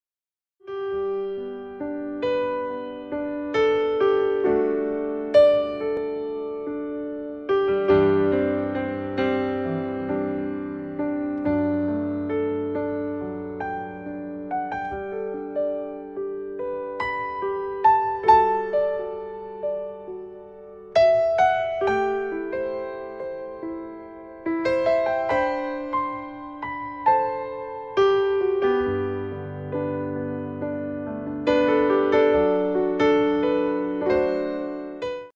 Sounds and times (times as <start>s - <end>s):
Music: 0.6s - 35.3s.